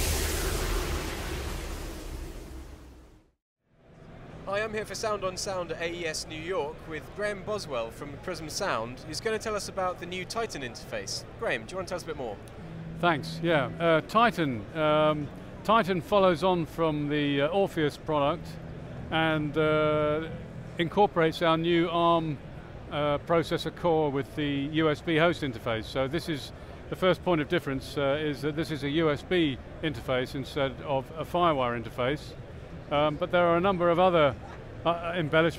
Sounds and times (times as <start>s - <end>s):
Speech: 4.4s - 12.4s, 13.0s - 35.5s.